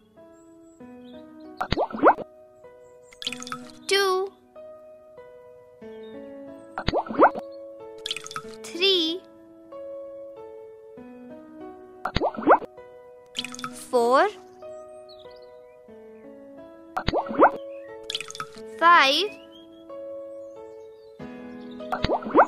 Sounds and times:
Music: 0.0 - 22.4
Child speech, kid speaking: 3.9 - 4.3, 8.7 - 9.2, 13.8 - 14.4, 18.8 - 19.4.

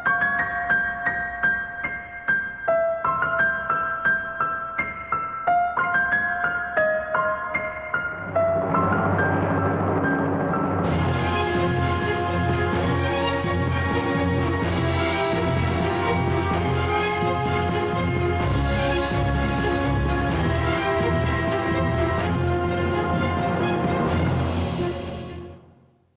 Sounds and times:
Music: 0.0 - 26.1.

